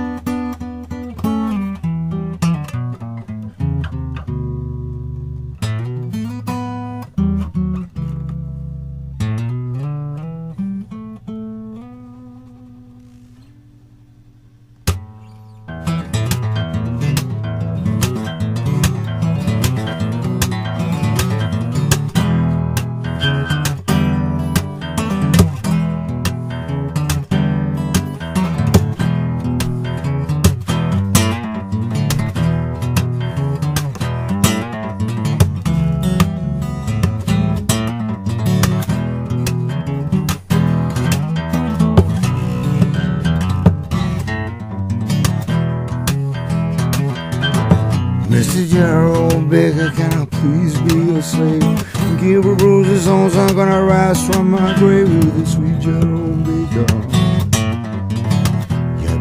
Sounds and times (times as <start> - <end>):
Music: 0.0 - 59.2.